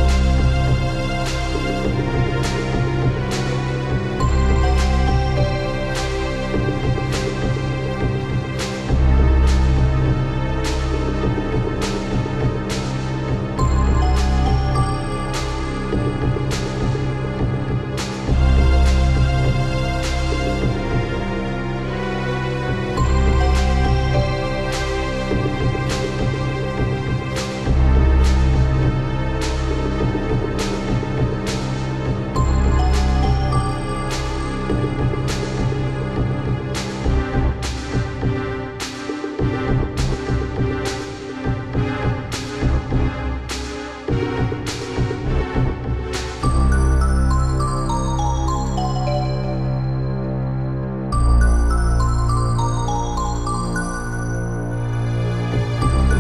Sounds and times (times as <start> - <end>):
Music: 0.0 - 56.2.